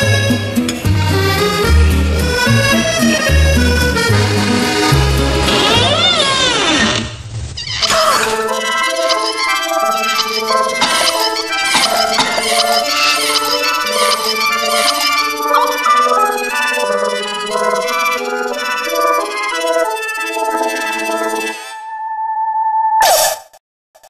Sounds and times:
Music: 0.0 - 7.1, 7.9 - 22.1.

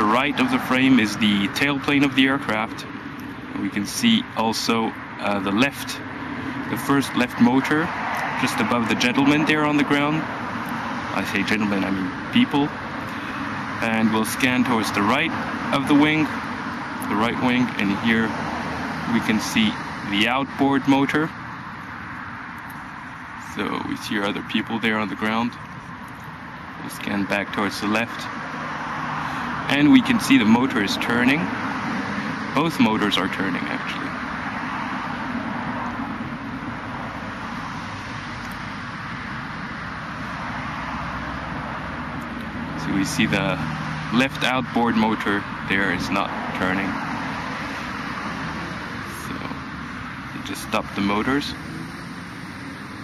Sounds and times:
Speech: 0.0 - 2.9, 3.6 - 6.0, 6.7 - 10.3, 11.2 - 12.8, 13.8 - 16.4, 17.0 - 18.4, 19.1 - 21.4, 23.4 - 25.6, 26.8 - 28.3, 29.7 - 31.5, 32.6 - 34.2, 42.8 - 47.0, 49.1 - 49.6, 50.4 - 51.6.

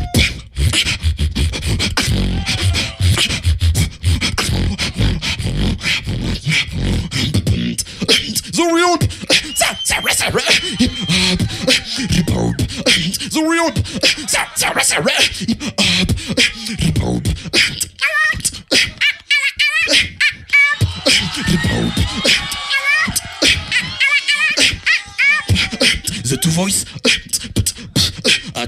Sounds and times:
Inside, large room or hall: 0.0 - 14.6, 19.8 - 28.6
Beatboxing: 0.0 - 28.6.

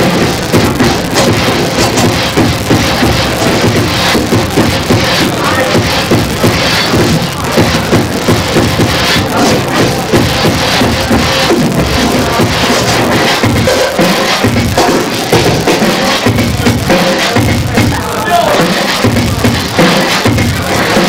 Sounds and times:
House music: 0.0 - 21.0
Scratching (performance technique): 0.0 - 21.0.

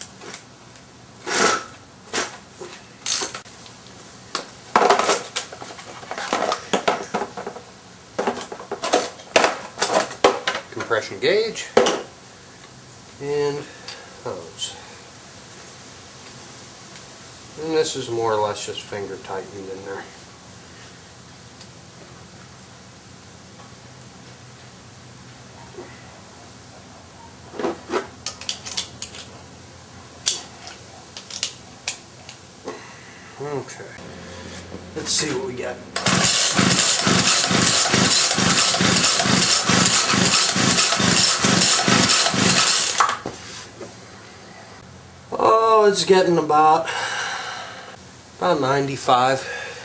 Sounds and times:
Speech: 10.7 - 11.8, 13.2 - 14.8, 17.6 - 20.2, 33.4 - 34.0, 35.0 - 35.8, 45.3 - 46.9, 48.4 - 49.5.

